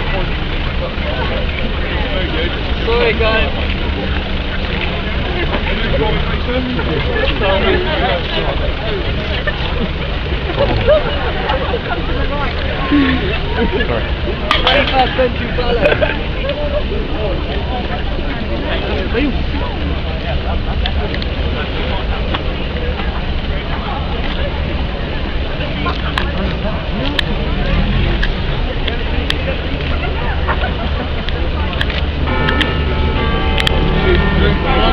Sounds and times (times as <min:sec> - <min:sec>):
Speech: 0:00.0 - 0:32.2, 0:33.7 - 0:34.9
Car: 0:00.0 - 0:34.9.